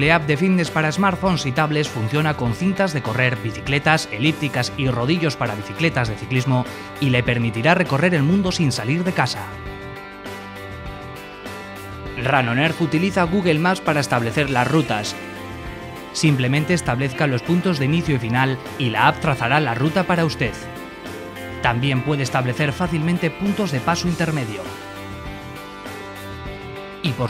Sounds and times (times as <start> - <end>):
Speech: 0.0 - 9.6, 12.2 - 15.2, 16.2 - 20.6, 21.6 - 24.8, 27.0 - 27.3
Music: 0.0 - 27.3.